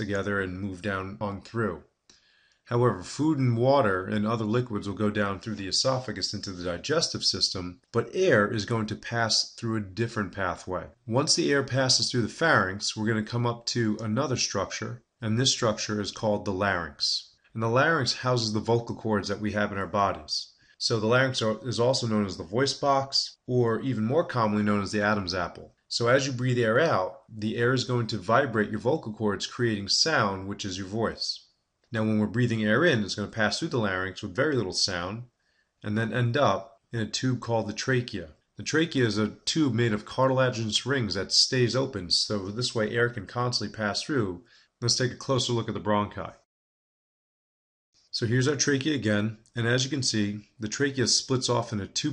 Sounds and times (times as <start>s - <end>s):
Speech: 0.0s - 1.9s, 2.7s - 46.5s, 48.1s - 52.1s.